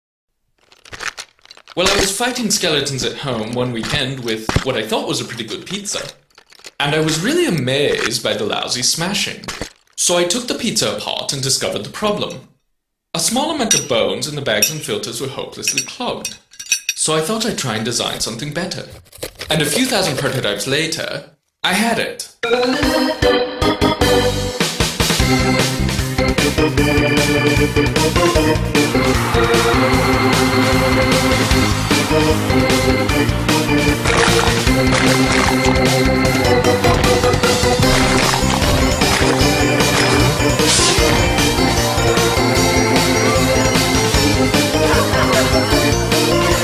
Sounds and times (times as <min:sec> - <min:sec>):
Speech: 0:01.8 - 0:06.2, 0:06.8 - 0:12.5, 0:13.1 - 0:16.4, 0:17.0 - 0:22.4.